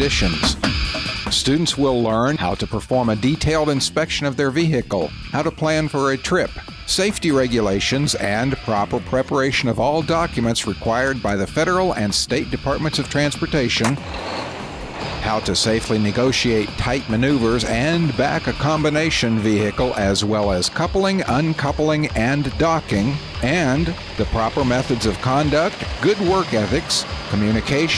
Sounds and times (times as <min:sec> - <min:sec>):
Speech: 0:00.0 - 0:00.6, 0:01.3 - 0:14.0, 0:15.2 - 0:27.9
Vehicle: 0:12.8 - 0:27.9.